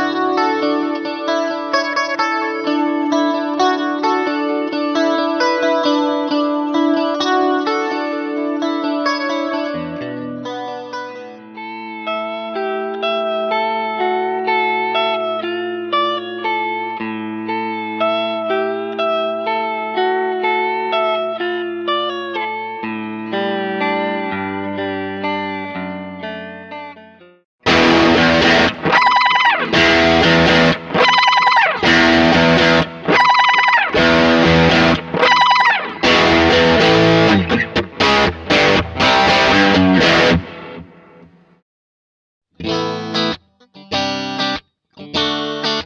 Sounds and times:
Steel guitar, slide guitar: 0:00.0 - 0:27.0, 0:27.7 - 0:40.8.

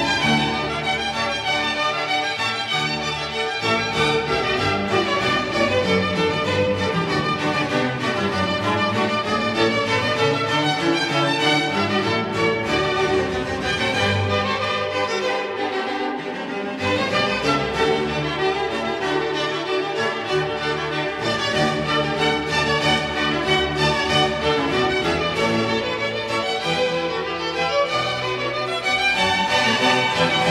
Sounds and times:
Piano: 0:00.0 - 0:30.5.

